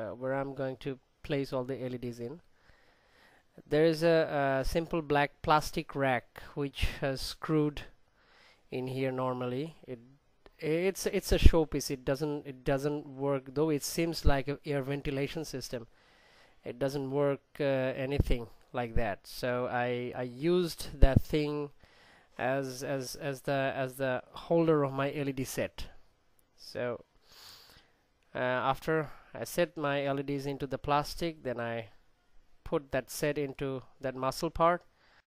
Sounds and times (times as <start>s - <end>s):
Speech: 0.0s - 2.4s, 3.6s - 8.0s, 8.7s - 15.9s, 16.6s - 21.8s, 22.4s - 26.0s, 26.6s - 27.1s, 28.3s - 32.0s, 32.6s - 34.9s.